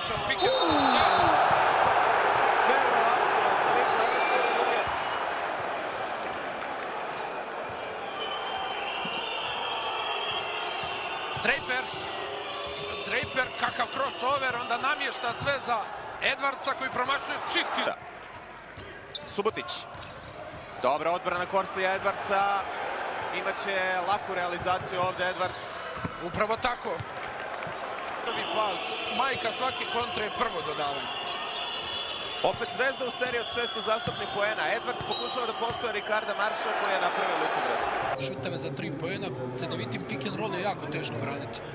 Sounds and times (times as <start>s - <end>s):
Speech: 19.3s - 19.9s, 28.3s - 31.1s, 32.4s - 41.6s.